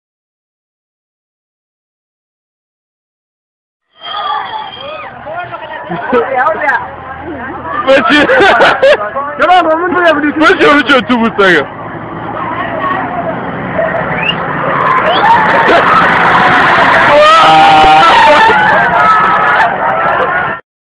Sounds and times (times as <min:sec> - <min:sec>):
Bus: 0:04.0 - 0:20.6.